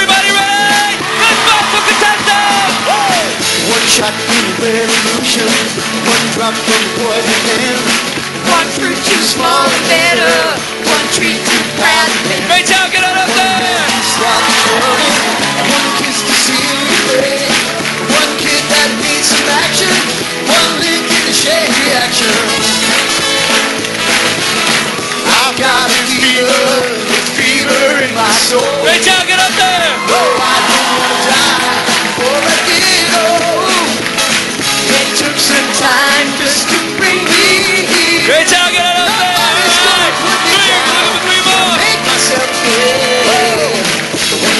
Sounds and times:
Music: 0.0 - 44.5
Male singing: 2.4 - 22.8, 25.2 - 34.0, 34.8 - 43.9.

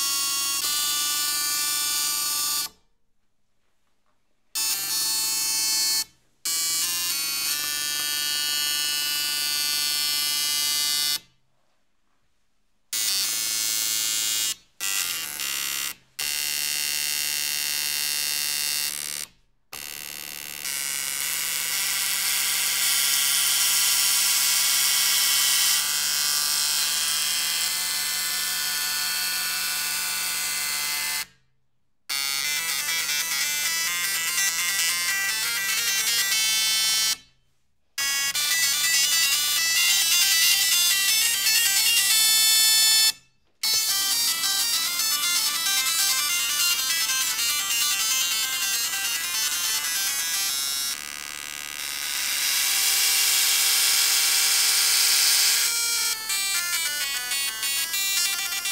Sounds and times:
Printer: 0.0 - 2.8, 4.6 - 11.3, 13.0 - 31.4, 32.1 - 37.3, 38.0 - 58.7.

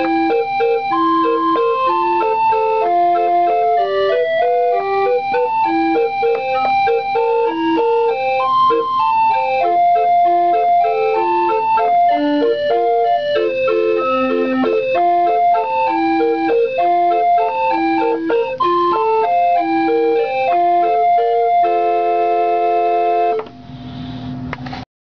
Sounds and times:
Music: 0.0 - 24.3.

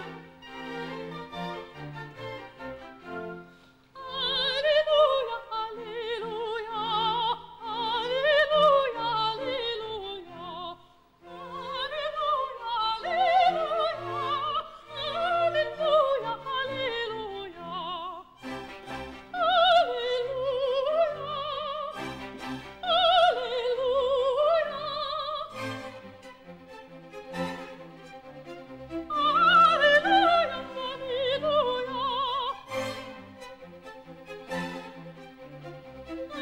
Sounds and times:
Opera: 0.0 - 36.4
Female singing: 4.0 - 18.2, 19.4 - 22.0, 22.8 - 25.5, 29.1 - 32.7.

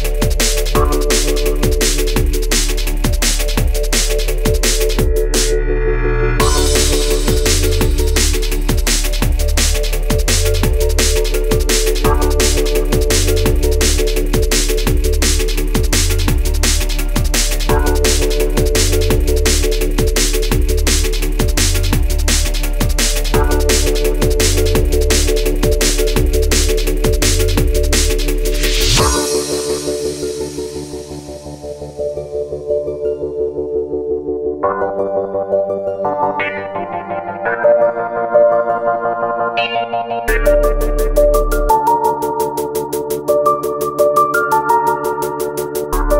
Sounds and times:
Drum kit: 0.0 - 5.7, 6.3 - 31.6, 39.6 - 46.1
Bass drum: 0.0 - 31.3, 46.0 - 46.1.

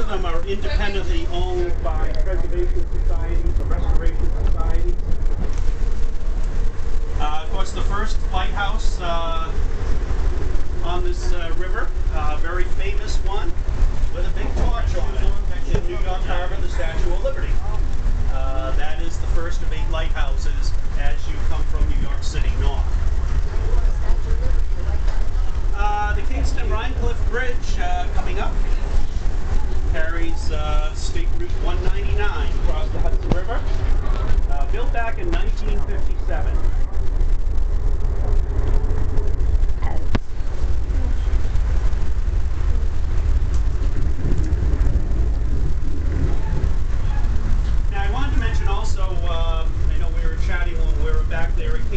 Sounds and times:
Speech: 0.0 - 5.1, 7.2 - 9.6, 10.8 - 22.9, 23.6 - 29.0, 29.8 - 36.8, 39.8 - 40.2, 47.9 - 51.9
Vehicle: 0.0 - 51.9.

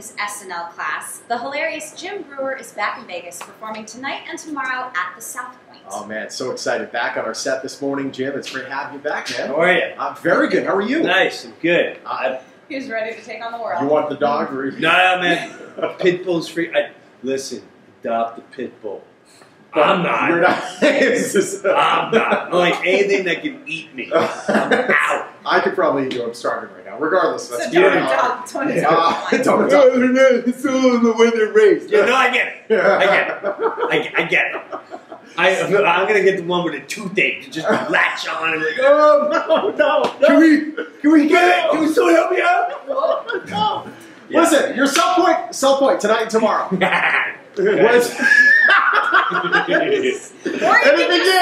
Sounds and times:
Speech: 0.0 - 19.0, 19.8 - 34.8, 35.4 - 48.4, 49.3 - 51.4.

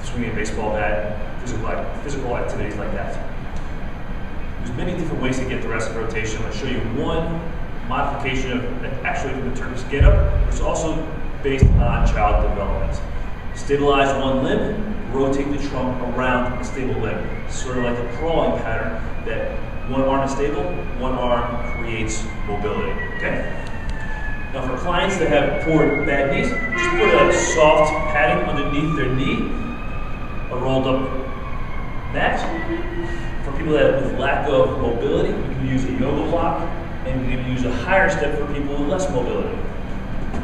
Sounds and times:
Speech: 0.0 - 3.3, 4.6 - 23.6, 24.6 - 29.5, 30.5 - 31.2, 32.1 - 32.6, 33.4 - 39.6.

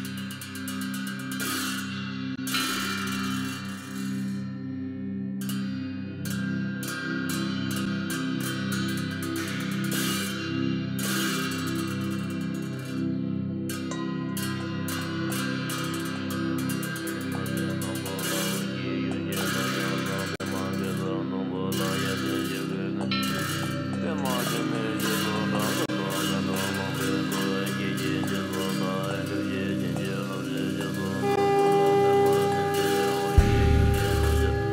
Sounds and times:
Music: 0.0 - 34.7.

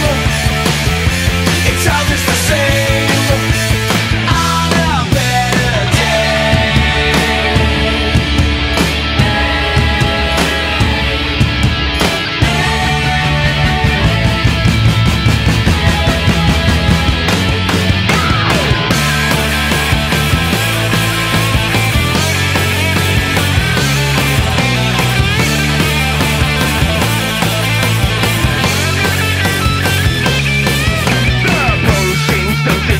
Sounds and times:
Grunge: 0.0 - 32.9.

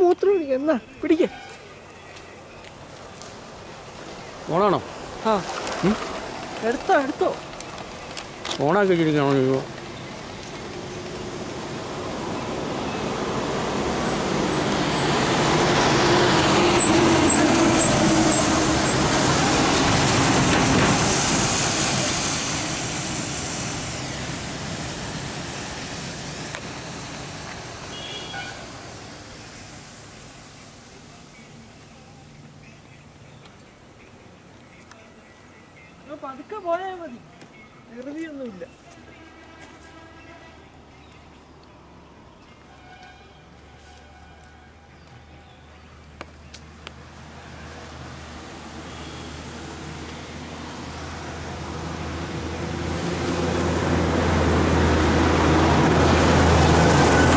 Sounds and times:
Bus: 0.0 - 57.3.

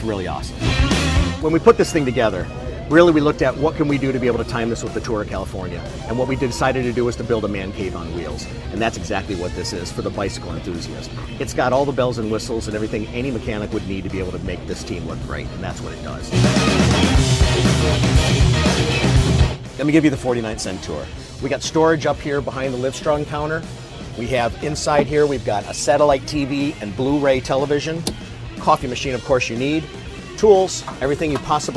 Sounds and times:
Speech: 0.0 - 0.6, 1.4 - 16.4, 19.8 - 28.0, 28.6 - 31.7
Music: 0.0 - 31.7.

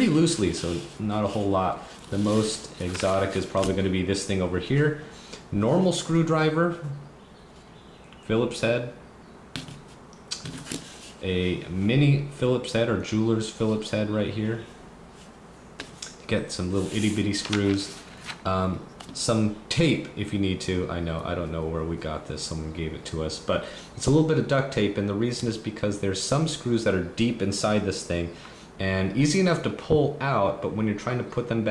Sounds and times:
Speech: 0.0 - 7.0, 8.2 - 9.0, 11.2 - 14.7, 16.2 - 31.7.

